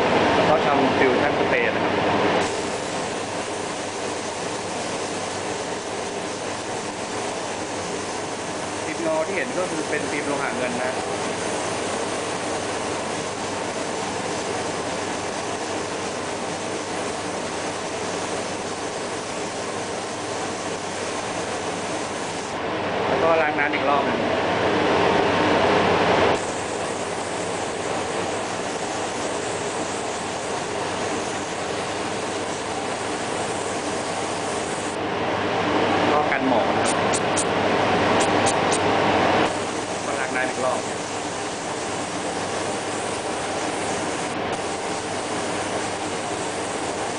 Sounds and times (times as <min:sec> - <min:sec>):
Speech: 0:00.5 - 0:01.9, 0:08.9 - 0:11.0, 0:23.1 - 0:24.3, 0:36.1 - 0:36.8, 0:40.1 - 0:40.8
Spray: 0:02.4 - 0:22.6, 0:26.4 - 0:35.0, 0:39.4 - 0:47.1.